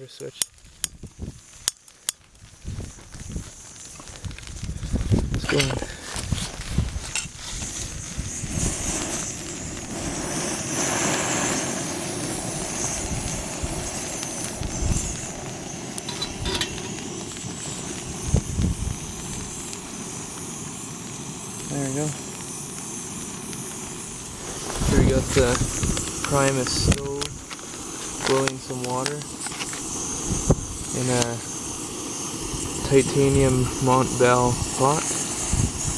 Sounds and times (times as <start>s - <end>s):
Outside, rural or natural: 0.0s - 35.9s.